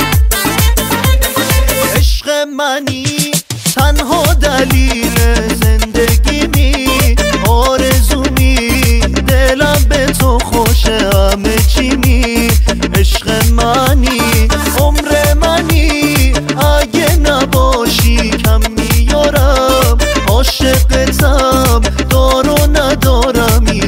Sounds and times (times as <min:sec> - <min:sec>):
House music: 0:00.0 - 0:23.8.